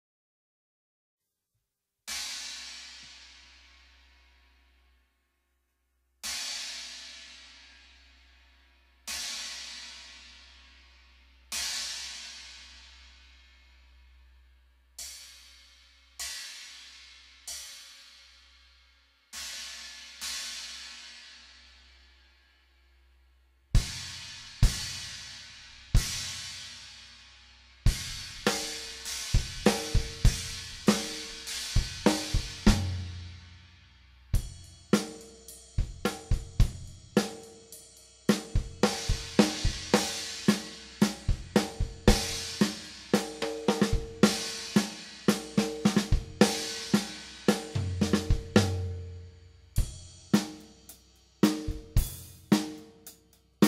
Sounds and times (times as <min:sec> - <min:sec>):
Music: 0:02.1 - 0:53.6.